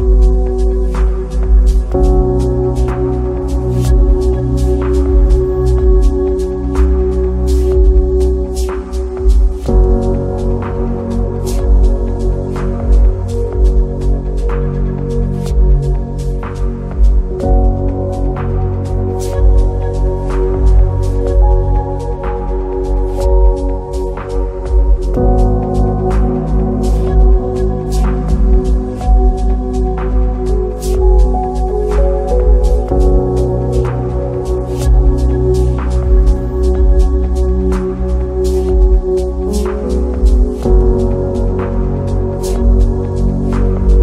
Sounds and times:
Electronica: 0.0s - 44.0s.

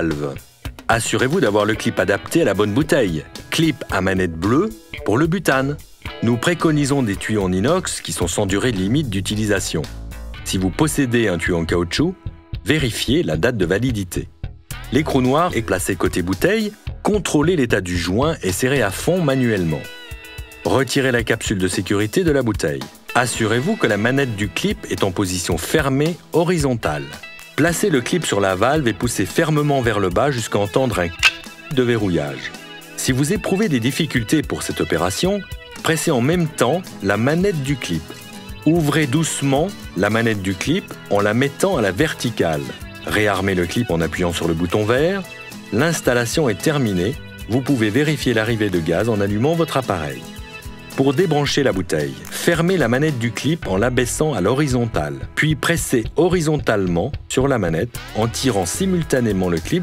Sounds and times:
Speech: 0.0s - 19.9s, 20.6s - 50.3s, 50.9s - 59.8s
Music: 0.0s - 59.8s.

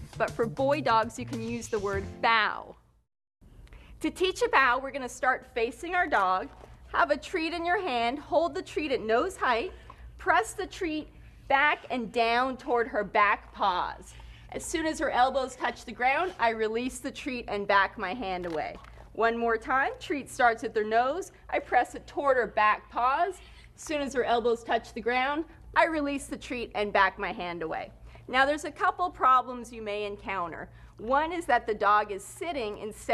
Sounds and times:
Speech: 0.2s - 2.8s, 4.0s - 33.1s.

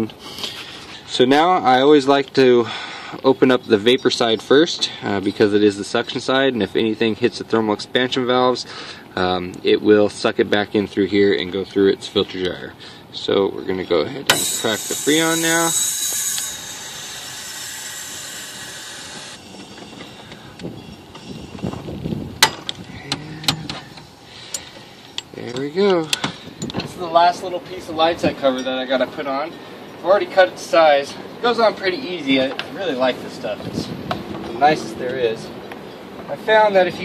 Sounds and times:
Speech: 1.1s - 15.8s, 25.4s - 26.1s, 26.9s - 33.9s, 34.5s - 35.5s, 36.3s - 37.0s.

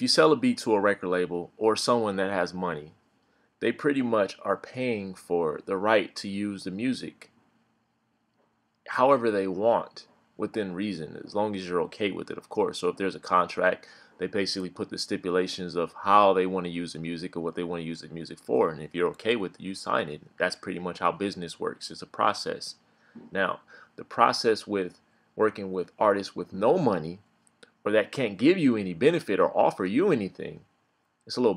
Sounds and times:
Speech: 0.0s - 3.0s, 3.6s - 7.3s, 8.9s - 27.2s, 27.9s - 30.7s, 31.3s - 31.5s.

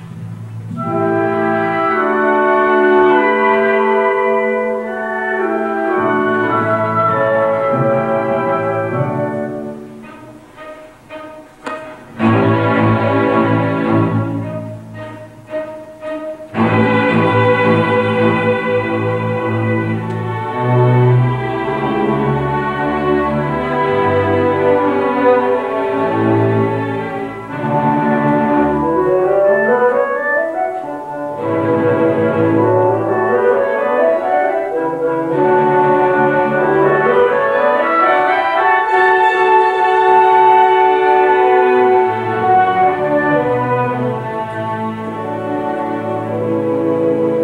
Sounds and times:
Violin, fiddle: 9.7s - 27.8s.

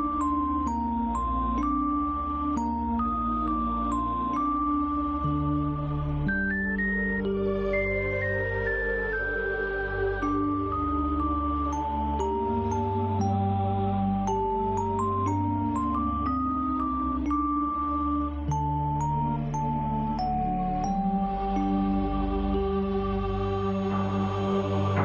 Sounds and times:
Electronica: 0.0s - 25.0s.

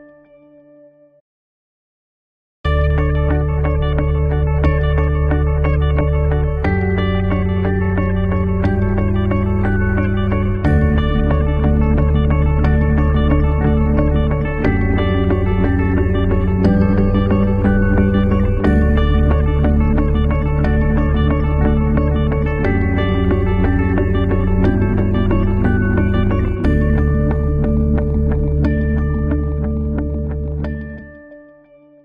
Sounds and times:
Music: 0.0s - 1.2s, 2.7s - 32.0s.

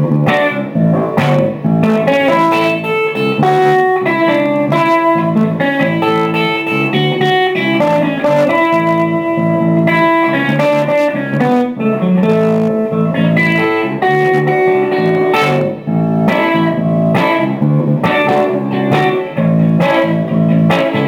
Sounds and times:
Electric guitar: 0.0s - 21.0s
Strum: 0.0s - 21.0s.

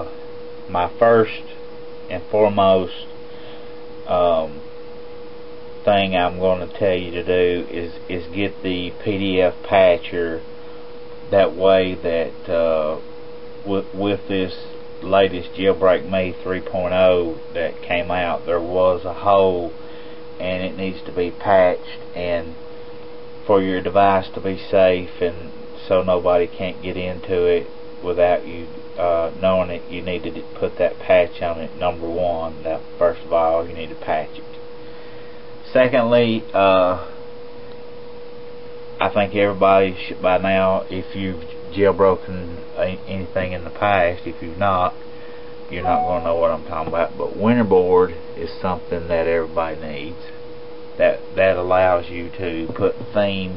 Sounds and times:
Speech: 0.0s - 3.2s, 4.1s - 4.6s, 5.8s - 10.5s, 11.3s - 13.0s, 13.6s - 19.8s, 20.4s - 22.6s, 23.4s - 34.6s, 35.6s - 37.2s, 39.0s - 45.0s, 45.7s - 50.4s, 51.0s - 53.5s.

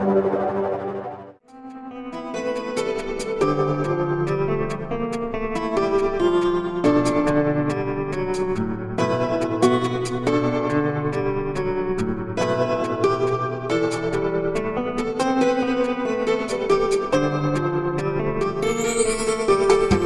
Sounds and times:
New-age music: 0.0s - 20.0s.

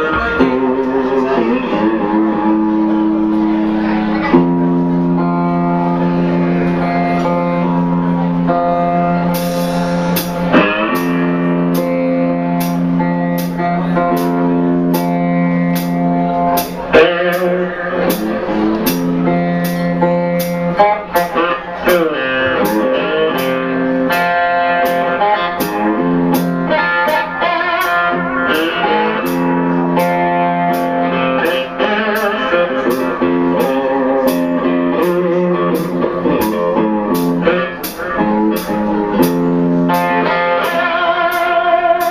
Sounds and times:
Strum: 0.0s - 42.1s.

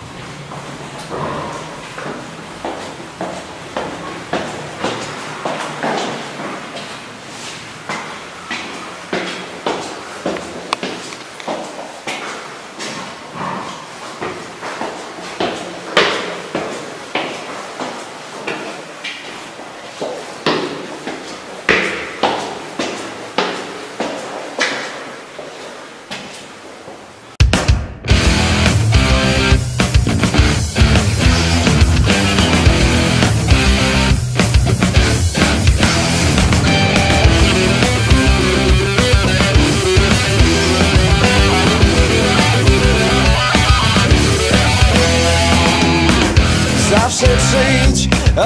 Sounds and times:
Music: 27.4s - 48.4s.

